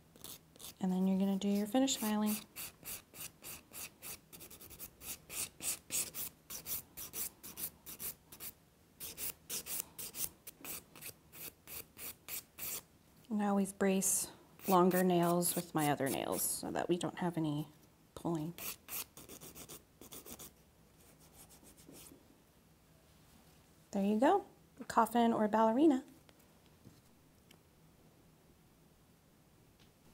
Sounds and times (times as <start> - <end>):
Rub: 0.2 - 12.8, 14.6 - 16.4, 18.6 - 22.2.